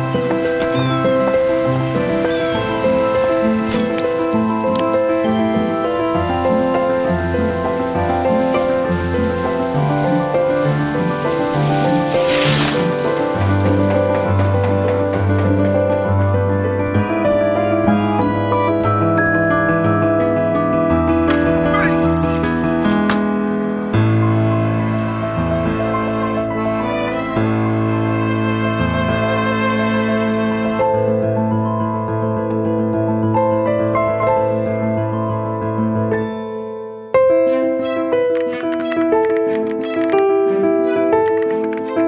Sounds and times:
Music: 0:00.0 - 0:42.0.

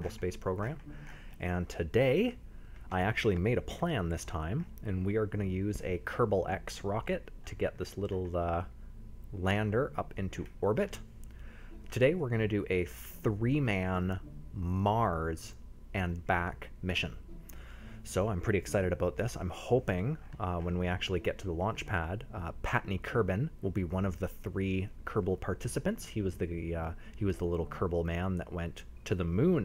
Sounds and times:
Speech: 0:00.0 - 0:00.8, 0:01.4 - 0:08.7, 0:09.3 - 0:11.0, 0:11.9 - 0:17.2, 0:18.1 - 0:29.6.

